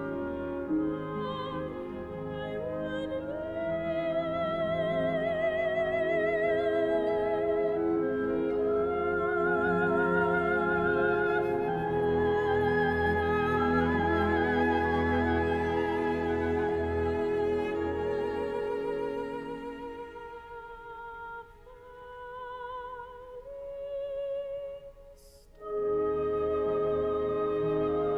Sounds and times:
Violin, fiddle: 0.0 - 21.0.

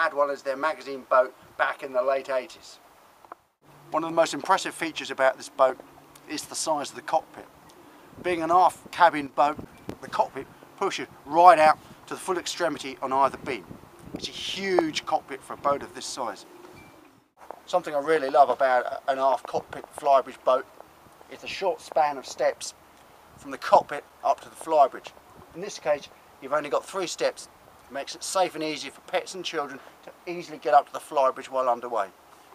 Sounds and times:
Speech: 0.0 - 2.8, 3.9 - 7.5, 8.2 - 13.6, 14.2 - 16.4, 17.7 - 20.7, 21.3 - 22.8, 23.4 - 32.1.

